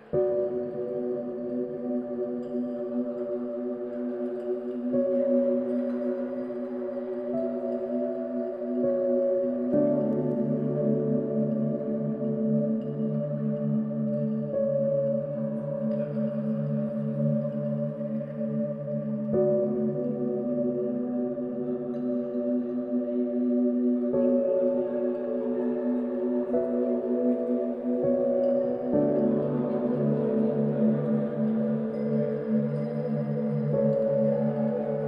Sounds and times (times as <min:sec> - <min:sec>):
Ambient music: 0:00.0 - 0:35.0.